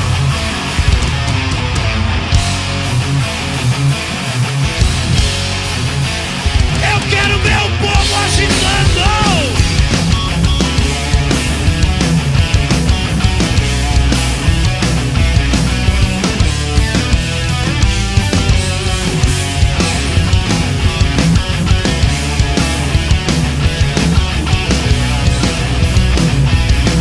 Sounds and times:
Music: 0:00.0 - 0:27.0.

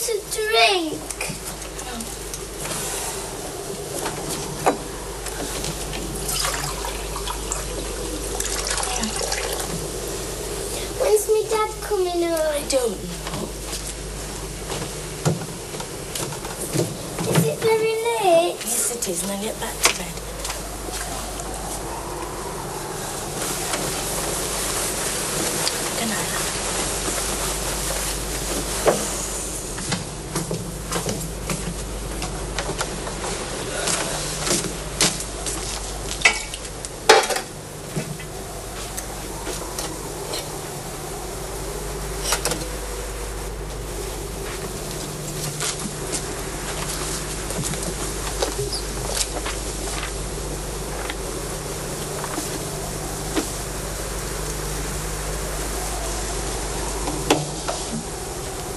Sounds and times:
Speech: 0:00.0 - 0:02.2, 0:10.8 - 0:13.4, 0:17.4 - 0:20.2, 0:26.0 - 0:26.5
Water: 0:01.1 - 0:11.8
Trickle, dribble: 0:06.2 - 0:09.8
Sink (filling or washing): 0:06.3 - 0:07.7, 0:08.4 - 0:09.7.

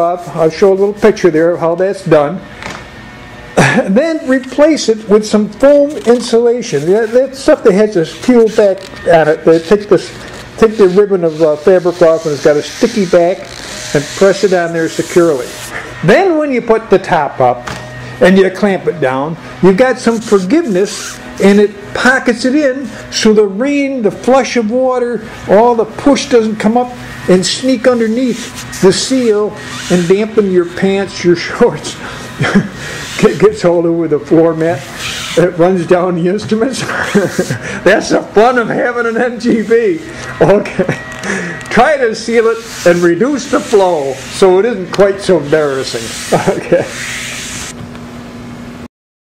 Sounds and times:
Speech: 0:00.0 - 0:02.4, 0:03.6 - 0:17.6, 0:18.2 - 0:41.0, 0:41.7 - 0:47.0.

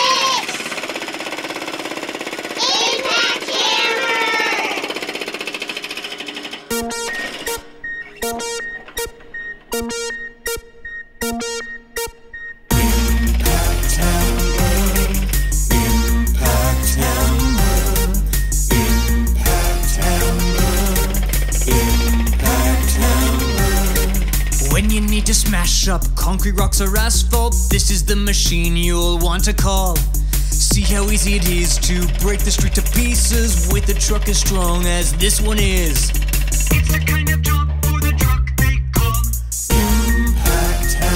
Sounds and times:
Music: 0:06.7 - 0:41.1.

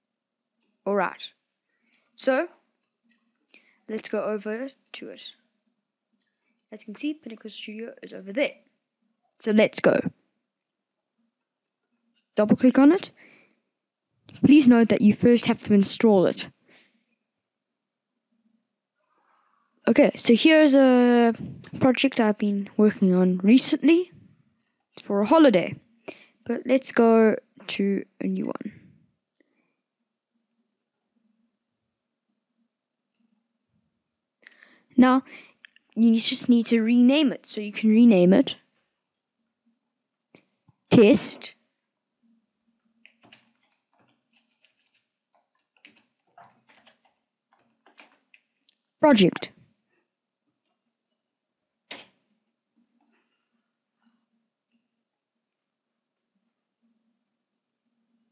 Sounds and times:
Speech: 0:00.9 - 0:01.4, 0:02.2 - 0:02.5, 0:03.9 - 0:05.3, 0:06.7 - 0:08.6, 0:09.4 - 0:10.1, 0:12.4 - 0:13.2, 0:14.3 - 0:16.5, 0:19.9 - 0:24.2, 0:25.0 - 0:25.8, 0:26.5 - 0:28.8, 0:35.0 - 0:35.4, 0:36.0 - 0:38.6, 0:40.9 - 0:41.5, 0:49.0 - 0:49.5.

